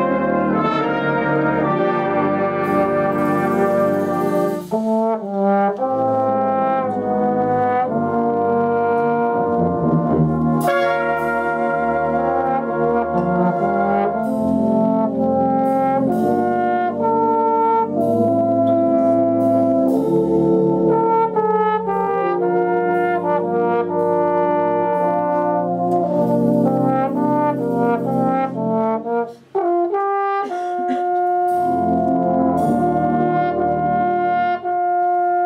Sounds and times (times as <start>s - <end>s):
Trombone: 0.0s - 35.4s.